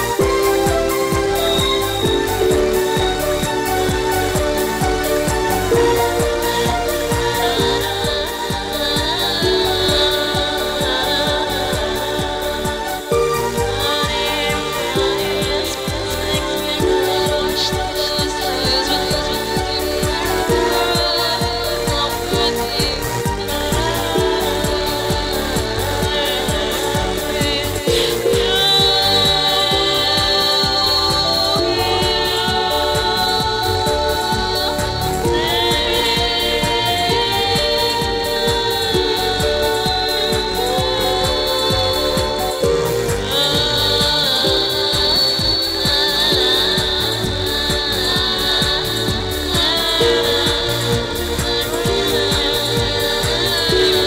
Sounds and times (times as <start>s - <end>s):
Techno: 0.0s - 54.0s.